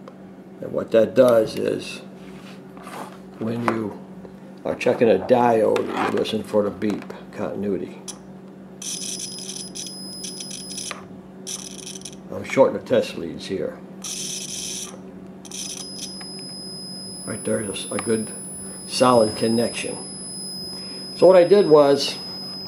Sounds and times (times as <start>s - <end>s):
Speech: 0.6s - 2.1s, 3.4s - 4.0s, 4.6s - 8.0s, 12.3s - 13.8s, 17.3s - 20.0s, 21.2s - 22.2s.